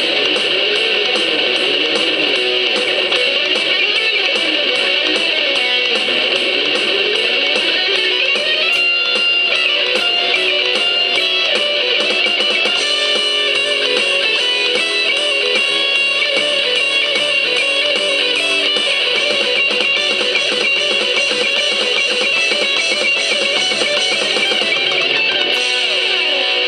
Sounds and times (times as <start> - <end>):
Strum: 2.3 - 22.1.